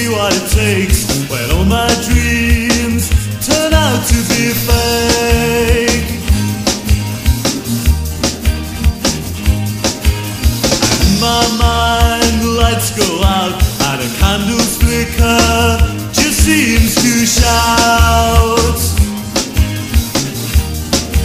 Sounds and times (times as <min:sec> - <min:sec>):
Rock and roll: 0:00.0 - 0:21.2.